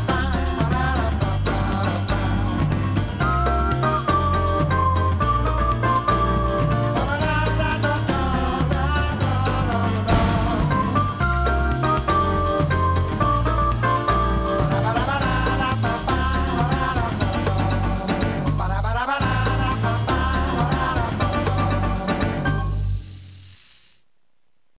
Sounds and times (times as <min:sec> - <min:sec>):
Male singing: 0:00.0 - 0:02.8, 0:07.0 - 0:11.0, 0:14.6 - 0:22.4
Music: 0:00.0 - 0:23.4.